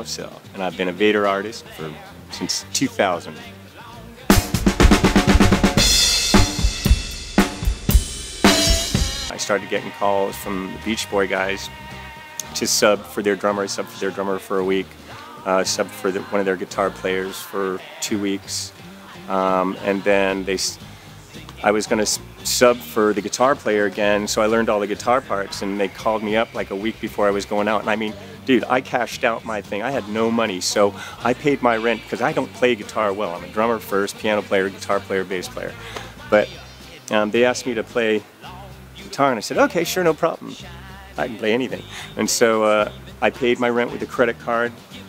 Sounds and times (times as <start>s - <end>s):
Speech: 0.0s - 4.0s, 9.3s - 11.7s, 12.4s - 18.7s, 19.3s - 20.8s, 21.6s - 44.8s
Music: 0.0s - 45.0s.